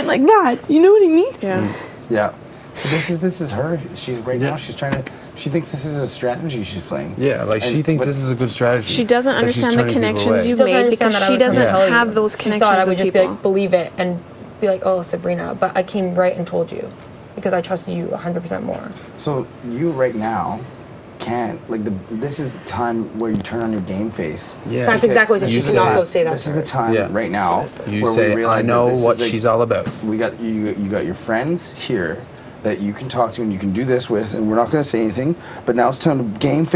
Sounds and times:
Inside, small room: 0:00.0 - 0:36.7
Speech: 0:09.3 - 0:13.6.

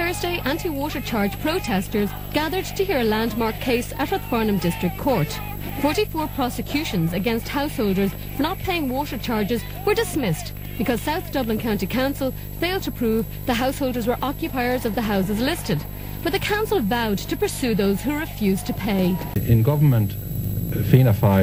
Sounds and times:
Speech: 0:00.0 - 0:20.2, 0:20.8 - 0:21.4.

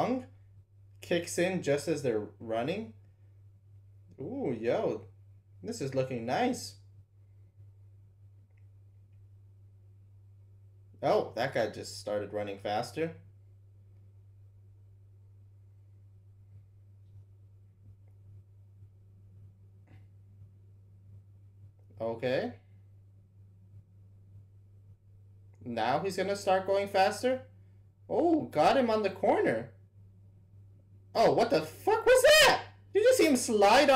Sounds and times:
Speech: 0:00.0 - 0:00.3, 0:01.0 - 0:03.0, 0:04.1 - 0:06.8, 0:11.0 - 0:13.2, 0:22.0 - 0:22.6, 0:25.6 - 0:27.5, 0:28.1 - 0:29.8, 0:31.1 - 0:33.9
Silence: 0:00.0 - 0:33.9.

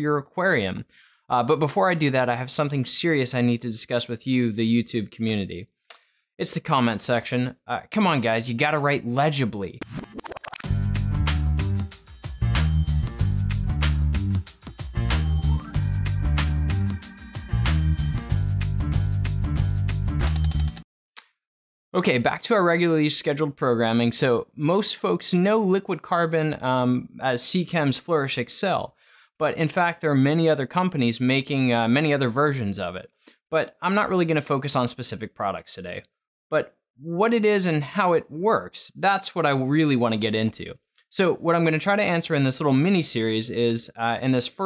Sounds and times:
Speech: 0:00.0 - 0:05.7, 0:06.4 - 0:09.8, 0:22.0 - 0:44.6.

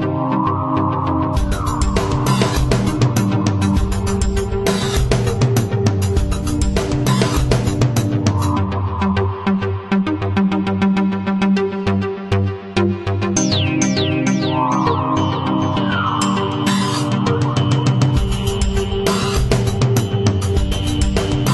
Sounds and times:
Electronica: 0:00.0 - 0:21.5.

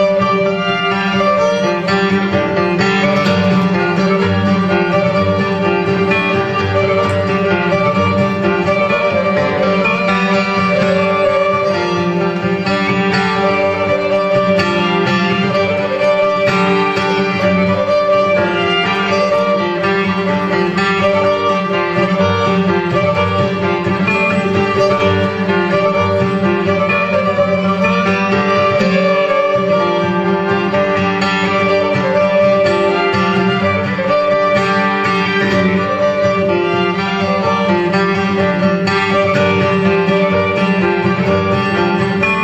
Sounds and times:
Guitar: 0:00.0 - 0:42.4
Violin, fiddle: 0:00.0 - 0:42.4
Wedding music: 0:00.0 - 0:42.4.

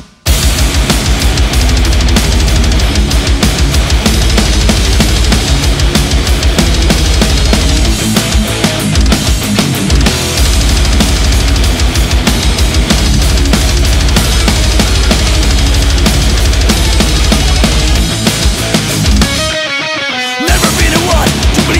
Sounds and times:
Rhythm and blues: 0:00.0 - 0:21.7.

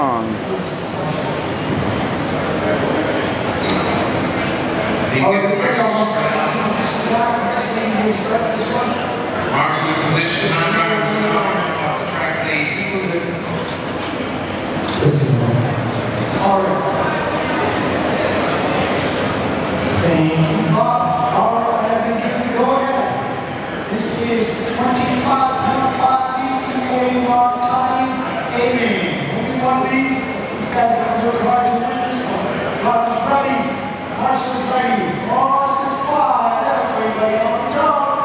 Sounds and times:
Speech: 0:00.0 - 0:00.7, 0:05.1 - 0:13.6, 0:14.9 - 0:17.4, 0:19.9 - 0:38.2.

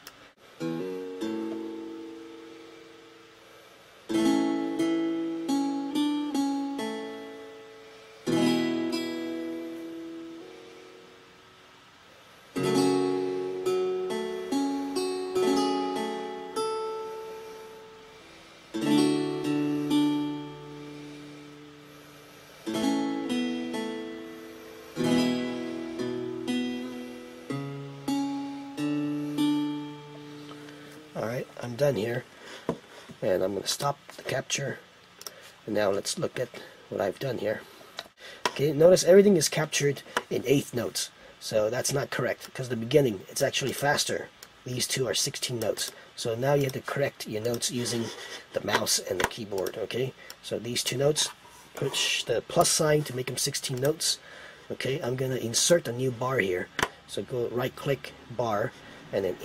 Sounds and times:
Acoustic guitar: 0:00.6 - 0:11.3, 0:12.5 - 0:31.8
Strum: 0:04.1 - 0:11.1, 0:12.6 - 0:32.0.

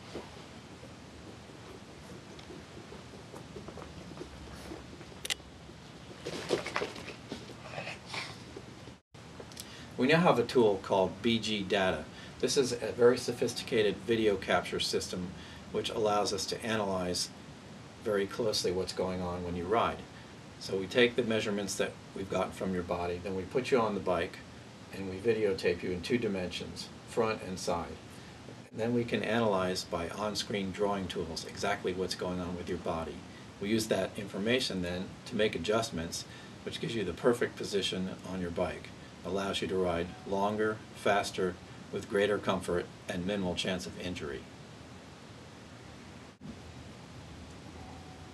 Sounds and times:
Speech: 0:10.0 - 0:17.3, 0:18.0 - 0:28.0, 0:28.7 - 0:44.5.

